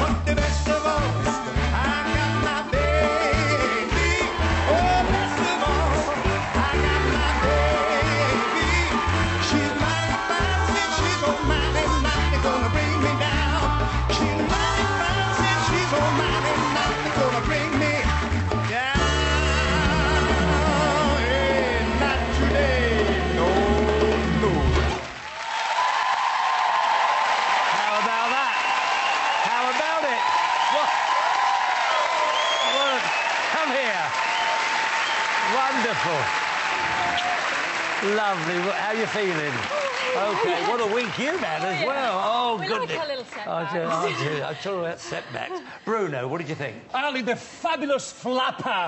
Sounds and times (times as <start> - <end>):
Swing music: 0.0 - 25.1.